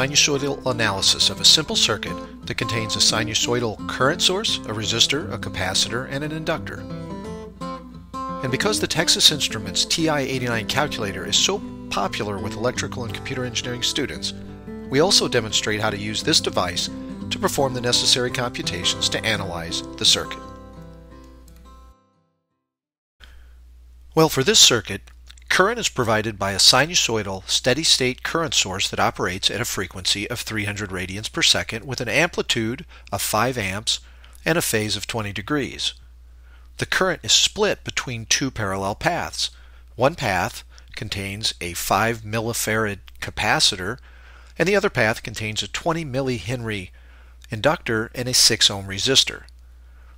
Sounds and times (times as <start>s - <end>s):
Speech: 0.0s - 6.9s, 8.4s - 20.5s, 24.2s - 36.0s, 36.8s - 44.0s, 44.6s - 49.5s.